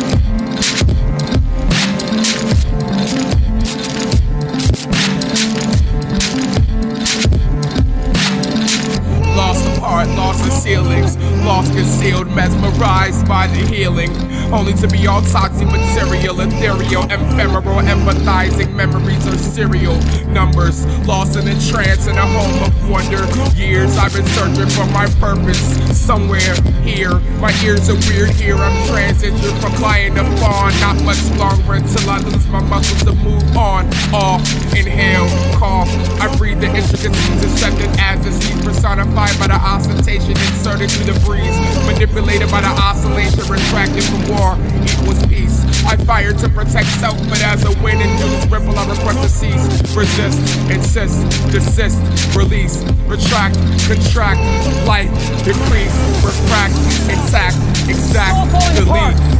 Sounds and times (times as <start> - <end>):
Funk: 0.0 - 59.3
Rhythm and blues: 0.0 - 59.3.